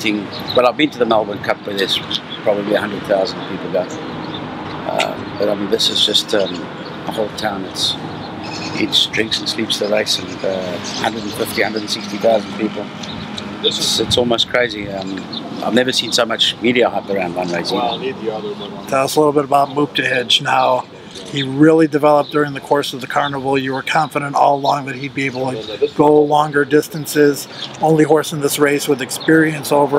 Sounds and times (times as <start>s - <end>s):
Speech: 0.0s - 3.9s, 4.8s - 8.0s, 8.7s - 12.9s, 13.6s - 29.9s.